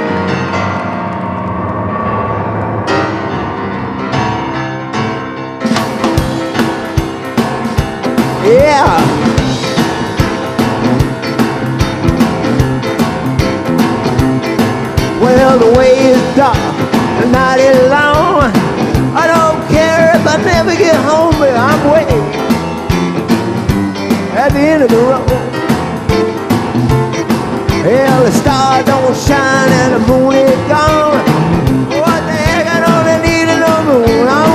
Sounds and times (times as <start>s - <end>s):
Rock and roll: 0.0s - 34.5s.